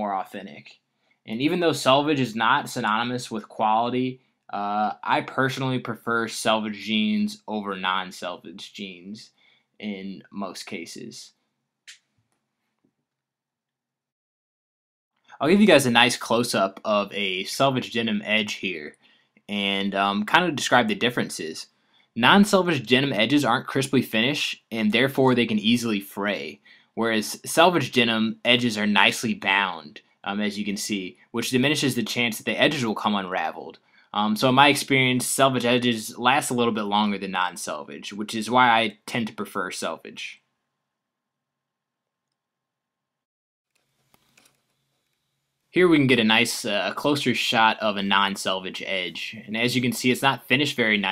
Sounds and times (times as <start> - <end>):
Speech: 0.0 - 11.3, 15.4 - 40.4, 45.8 - 51.1
Inside, small room: 0.0 - 14.2, 15.1 - 51.1.